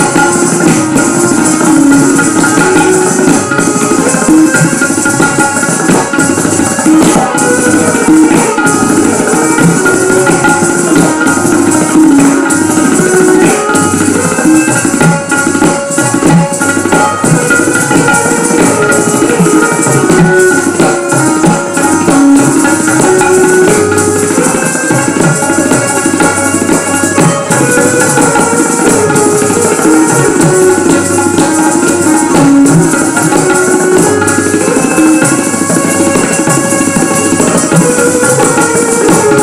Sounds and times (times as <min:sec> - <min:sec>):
Wood block: 0:00.0 - 0:39.4.